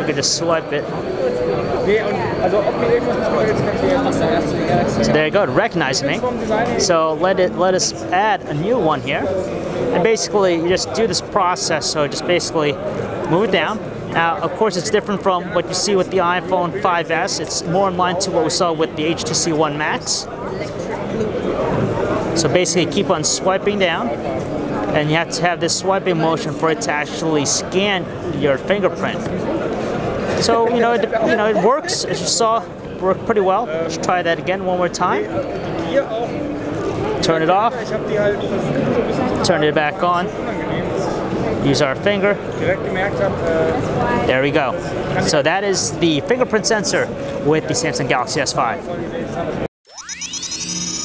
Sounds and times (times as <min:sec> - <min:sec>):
Speech: 0:01.6 - 0:29.4.